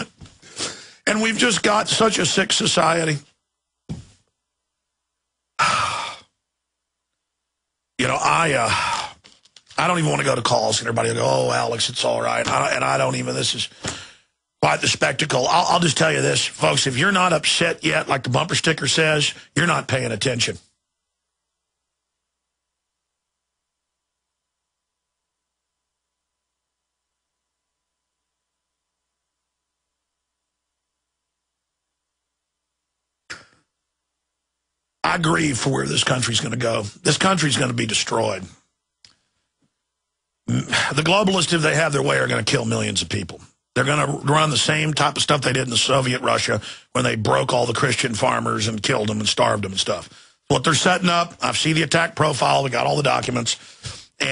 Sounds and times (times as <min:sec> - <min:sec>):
Speech: 0:01.0 - 0:03.4, 0:08.0 - 0:13.8, 0:14.6 - 0:20.7, 0:35.0 - 0:38.6, 0:40.5 - 0:54.3
Sigh: 0:05.6 - 0:06.3, 0:08.7 - 0:09.2.